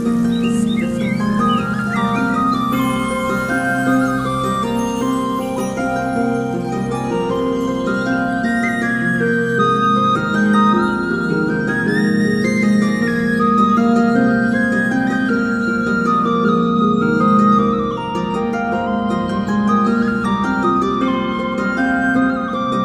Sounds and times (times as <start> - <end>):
Flute: 0.0 - 22.8
Tender music: 0.0 - 22.8.